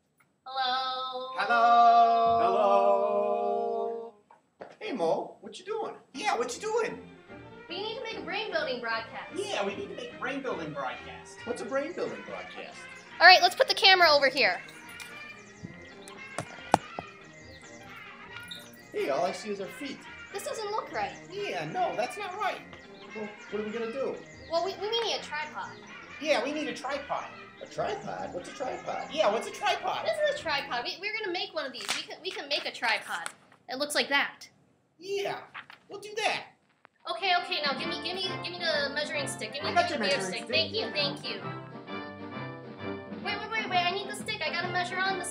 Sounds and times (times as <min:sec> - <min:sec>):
Music: 0:05.6 - 0:31.7, 0:37.1 - 0:45.3.